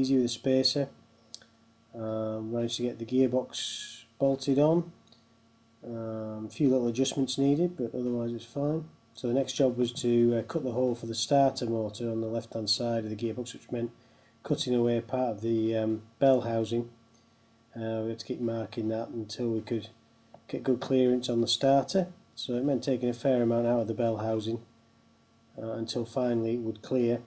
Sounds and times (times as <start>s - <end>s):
Speech: 0.0s - 1.0s, 2.0s - 5.0s, 5.8s - 17.0s, 17.8s - 24.7s, 25.6s - 27.2s.